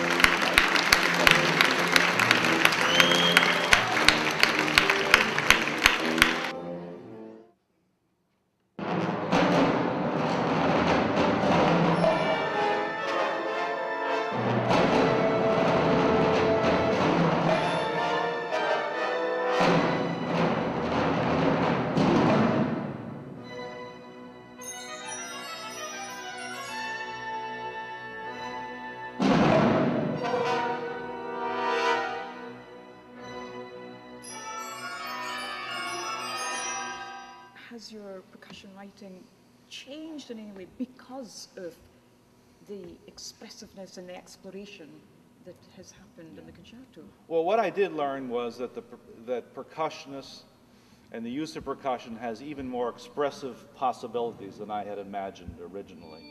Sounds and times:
Percussion: 0.0 - 6.5, 8.8 - 37.8, 51.2 - 56.3.

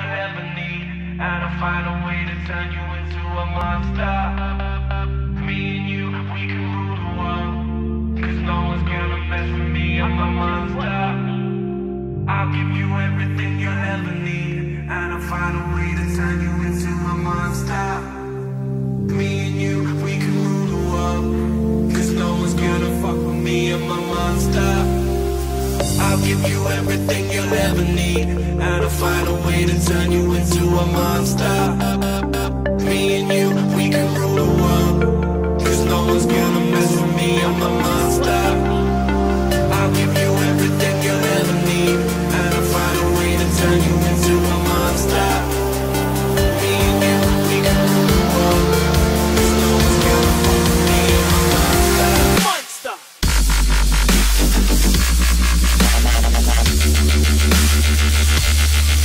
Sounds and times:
Dubstep: 19.0 - 59.0.

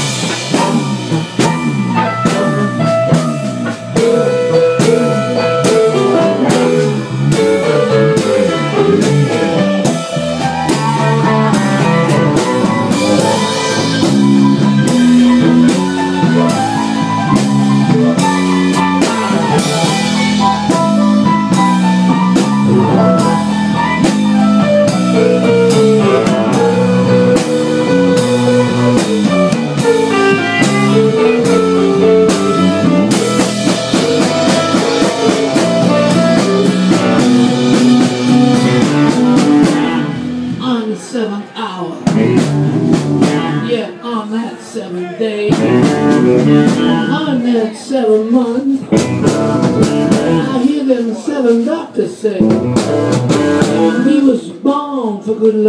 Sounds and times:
Guitar: 0.0 - 54.8.

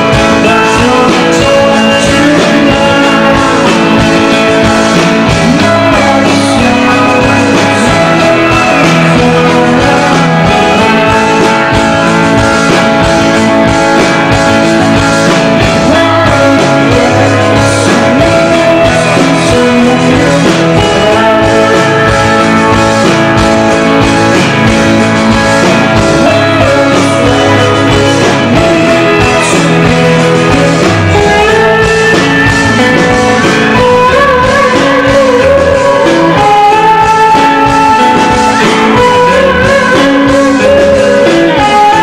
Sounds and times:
Music: 0.0 - 42.0.

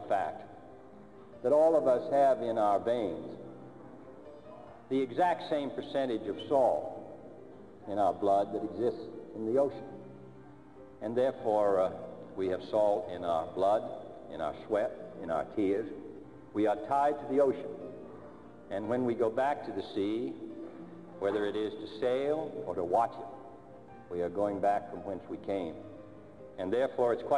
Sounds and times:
Male speech, man speaking: 0.0 - 0.5, 1.4 - 3.4, 4.5 - 7.1, 7.9 - 9.9, 11.0 - 16.0, 16.6 - 17.8, 18.7 - 20.5, 21.2 - 23.4, 24.1 - 25.8, 26.6 - 27.3
Music: 0.0 - 27.3
Narration, monologue: 0.0 - 27.3.

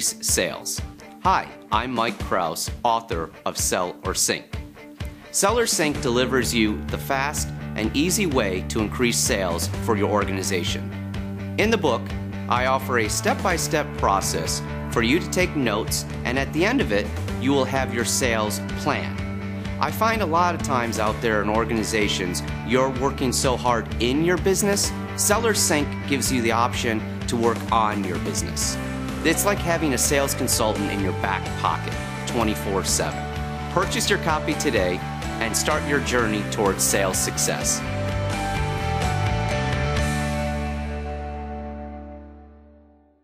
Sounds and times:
Speech: 0.0 - 4.5, 5.4 - 10.9, 11.6 - 19.2, 19.8 - 37.8
Music: 0.0 - 43.2.

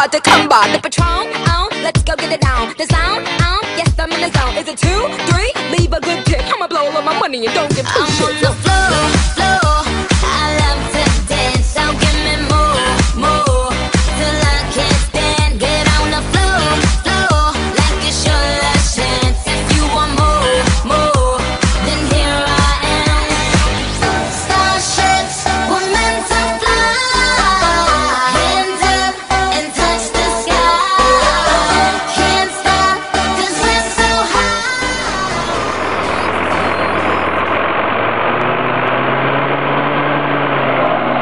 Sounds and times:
Music: 0.0 - 37.3.

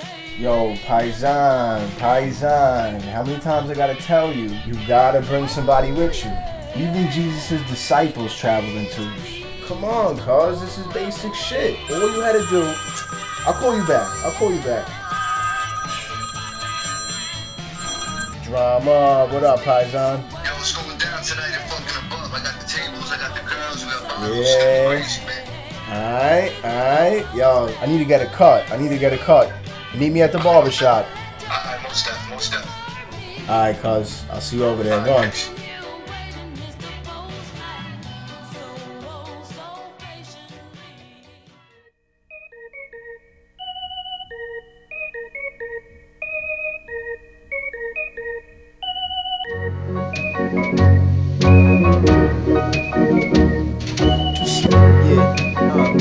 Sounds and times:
Background music: 0.0 - 41.8, 42.4 - 56.0
Speech: 0.4 - 12.8, 18.5 - 32.8, 33.5 - 35.6, 54.4 - 56.0.

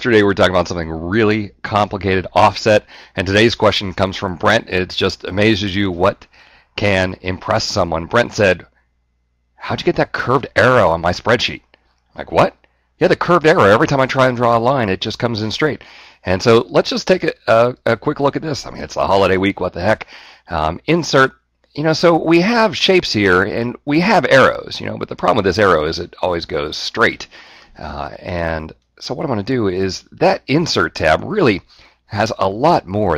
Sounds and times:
Speech: 0.0 - 8.7, 9.6 - 33.1.

